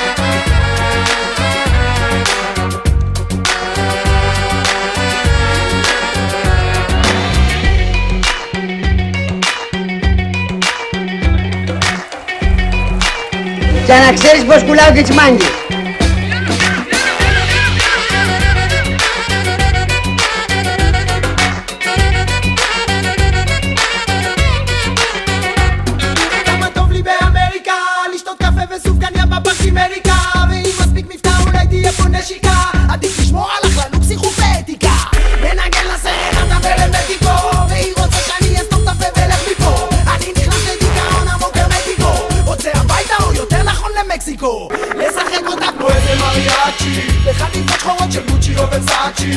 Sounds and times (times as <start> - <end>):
Exciting music: 0.0 - 27.5, 28.4 - 49.3.